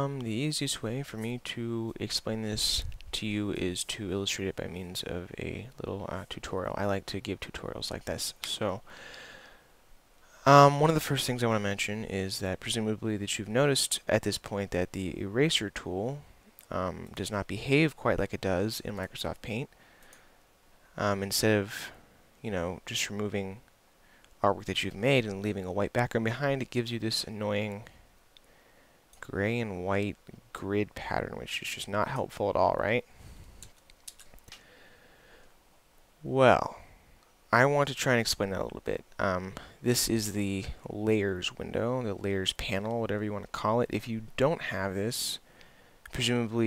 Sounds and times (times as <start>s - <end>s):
Speech: 0.0s - 8.9s, 10.4s - 19.7s, 21.0s - 23.6s, 24.4s - 28.0s, 29.2s - 33.1s, 36.2s - 36.9s, 37.5s - 45.4s, 46.1s - 46.6s.